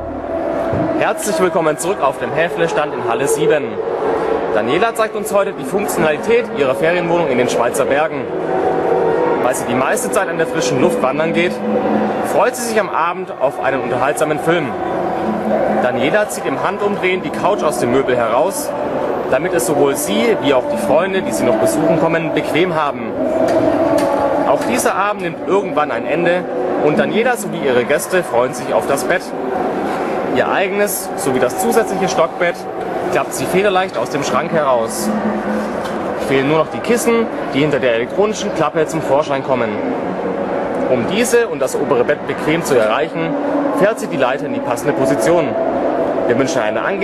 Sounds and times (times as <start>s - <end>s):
Speech: 1.0s - 8.3s, 9.4s - 23.3s, 24.5s - 29.3s, 30.3s - 35.3s, 36.2s - 39.9s, 40.9s - 45.6s, 46.3s - 47.0s.